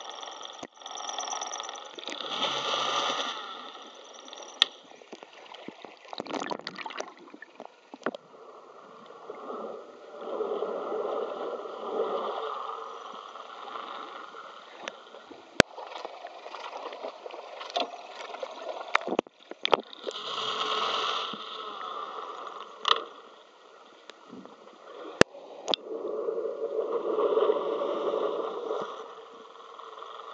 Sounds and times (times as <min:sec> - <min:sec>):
Boat, Water vehicle: 0:00.0 - 0:30.3.